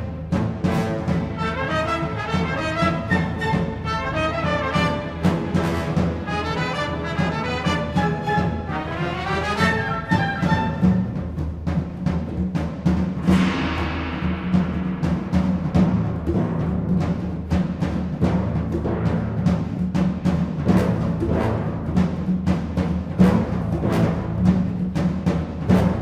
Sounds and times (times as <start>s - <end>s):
Music: 0.0s - 26.0s.